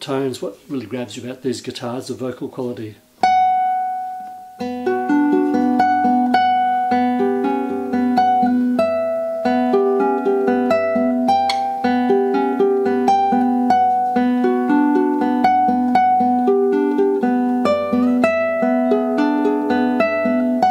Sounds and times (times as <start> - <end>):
Acoustic guitar: 3.0 - 20.7
Strum: 3.2 - 20.7.